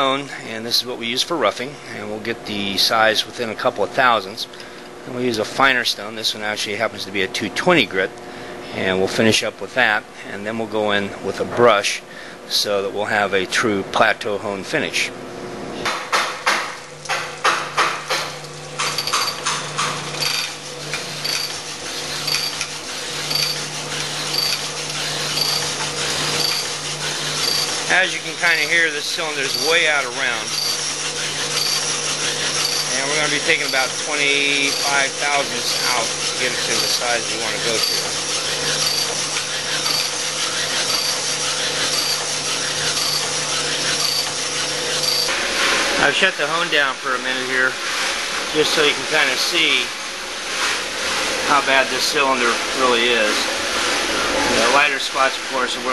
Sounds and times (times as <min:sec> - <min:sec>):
Tools: 0:17.1 - 0:26.8, 0:27.4 - 0:27.8, 0:29.4 - 0:29.8, 0:30.5 - 0:33.0, 0:37.7 - 0:45.3.